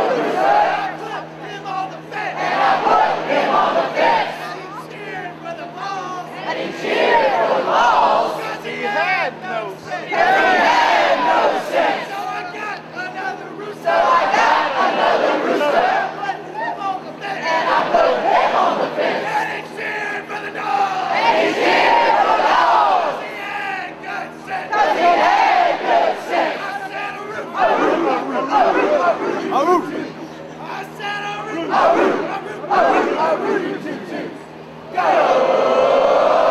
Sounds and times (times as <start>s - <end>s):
Speech: 0.7s - 2.6s, 3.6s - 6.6s, 8.0s - 10.2s, 11.6s - 18.0s, 19.2s - 21.2s, 26.4s - 34.4s.